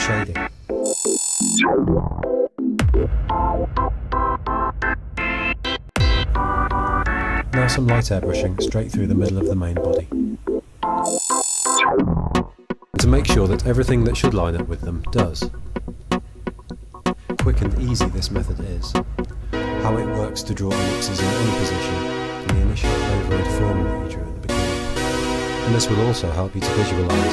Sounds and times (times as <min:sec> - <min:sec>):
Speech: 0:00.0 - 0:00.4, 0:07.5 - 0:10.1, 0:13.0 - 0:15.5, 0:17.4 - 0:19.0, 0:19.8 - 0:24.2, 0:25.7 - 0:27.3
Music: 0:00.0 - 0:27.3.